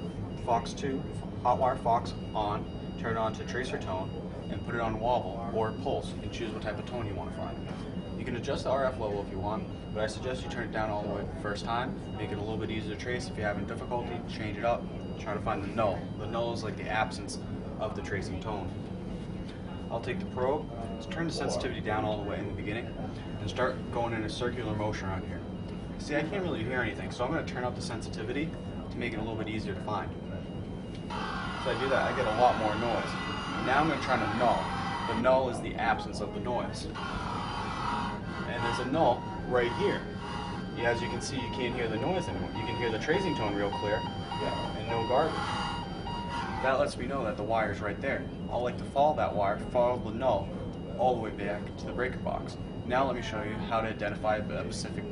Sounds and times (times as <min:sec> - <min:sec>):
Speech: 0:00.4 - 0:07.6, 0:08.2 - 0:18.8, 0:19.8 - 0:25.4, 0:26.0 - 0:30.5, 0:31.6 - 0:37.0, 0:38.0 - 0:40.1, 0:40.7 - 0:45.4, 0:46.5 - 0:55.1.